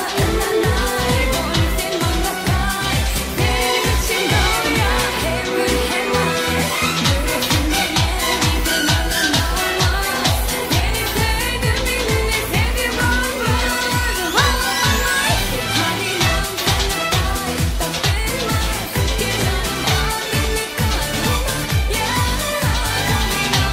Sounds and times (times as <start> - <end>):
Music of Asia: 0.0 - 23.7
Singing: 0.0 - 23.7.